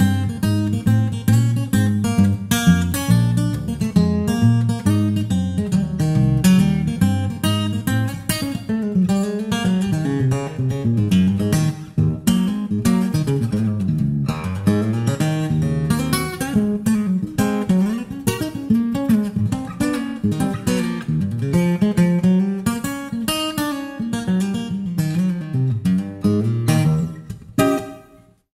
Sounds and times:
Acoustic guitar: 0.0 - 28.5
Strum: 0.0 - 28.5.

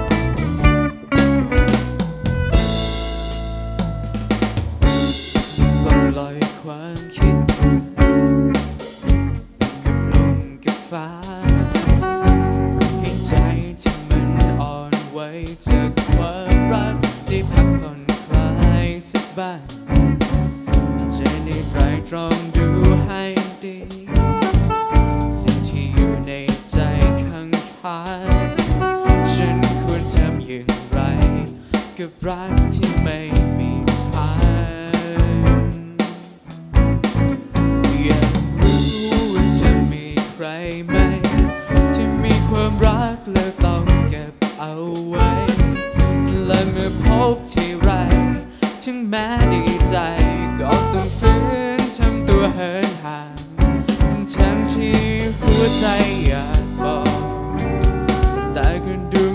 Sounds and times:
Soul music: 0.0 - 59.3.

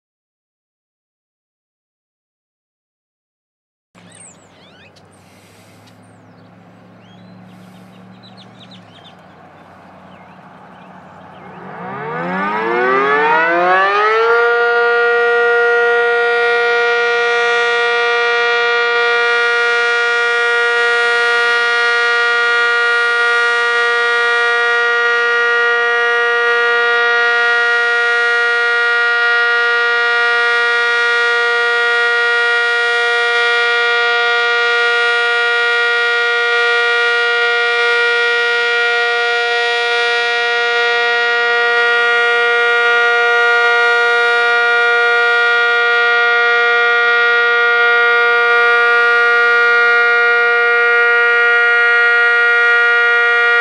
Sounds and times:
Civil defense siren: 4.0 - 53.6.

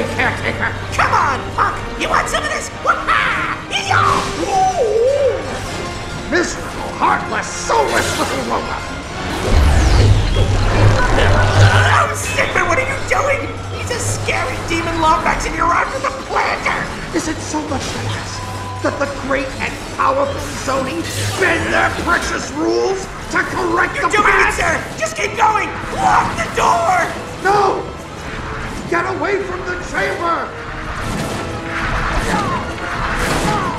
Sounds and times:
Speech: 0.0 - 5.0, 6.3 - 8.9, 11.6 - 18.4, 19.0 - 27.9, 28.9 - 30.5
Music: 0.0 - 33.7.

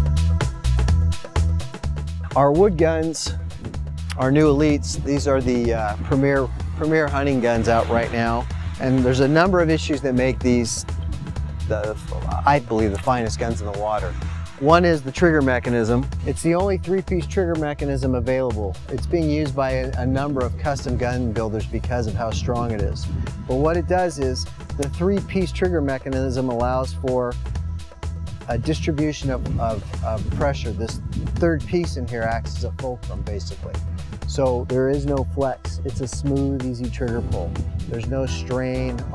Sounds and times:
Music: 0.0 - 39.1
Speech: 2.4 - 3.4, 4.1 - 10.8, 11.7 - 27.4, 28.5 - 39.1.

